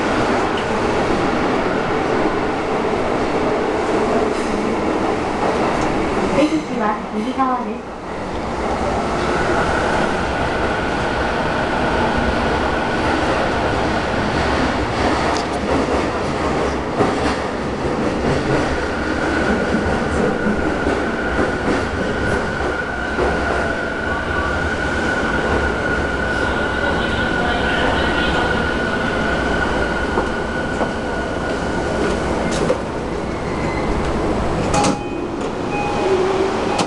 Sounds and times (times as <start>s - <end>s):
Subway, metro, underground: 0.0s - 36.8s
Train: 0.0s - 36.8s.